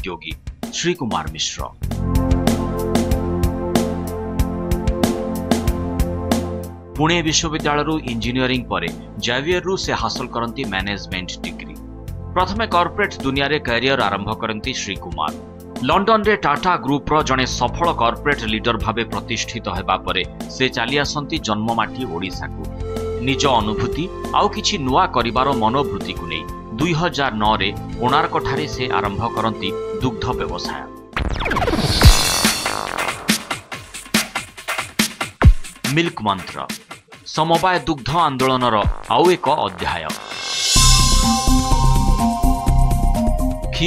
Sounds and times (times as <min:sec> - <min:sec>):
Speech: 0:00.0 - 0:01.8, 0:07.0 - 0:11.8, 0:12.4 - 0:22.6, 0:23.2 - 0:30.9, 0:35.8 - 0:40.2
Music: 0:00.0 - 0:43.8.